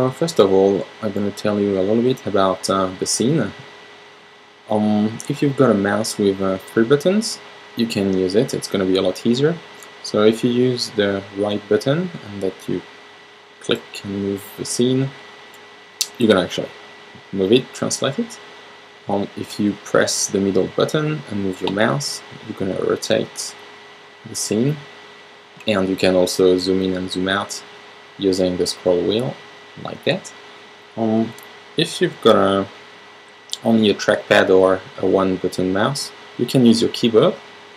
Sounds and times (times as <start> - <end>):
Speech: 0.0 - 3.7, 4.7 - 12.8, 13.6 - 15.2, 16.0 - 18.4, 19.1 - 23.6, 24.2 - 24.9, 25.6 - 30.4, 31.0 - 32.8, 33.5 - 37.4.